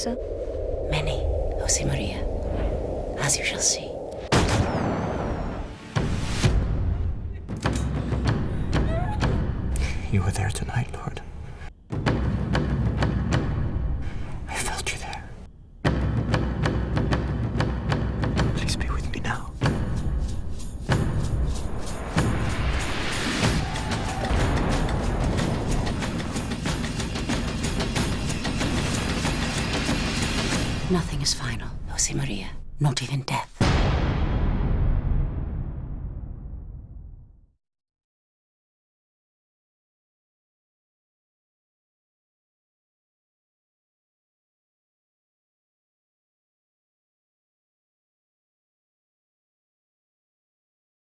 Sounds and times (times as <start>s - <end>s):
Music: 5.1s - 10.2s, 11.8s - 31.4s
Speech: 30.9s - 33.6s.